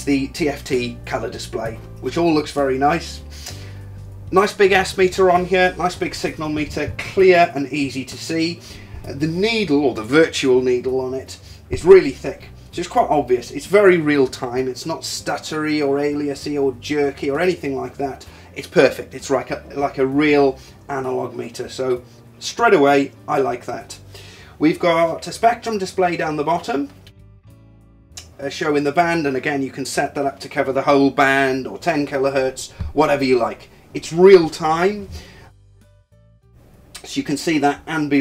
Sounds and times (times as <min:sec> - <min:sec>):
Speech: 0:00.0 - 0:03.2, 0:04.3 - 0:24.0, 0:24.6 - 0:26.9, 0:28.2 - 0:35.1, 0:37.0 - 0:38.2.